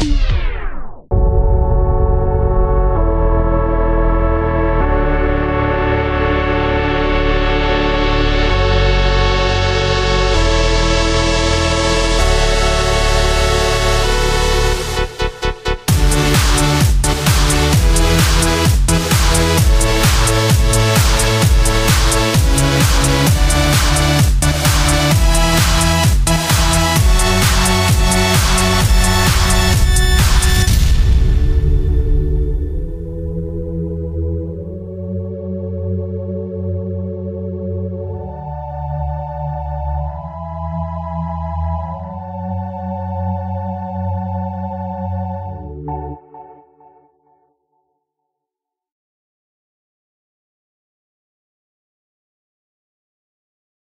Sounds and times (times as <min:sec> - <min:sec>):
Music: 0:00.0 - 0:48.5.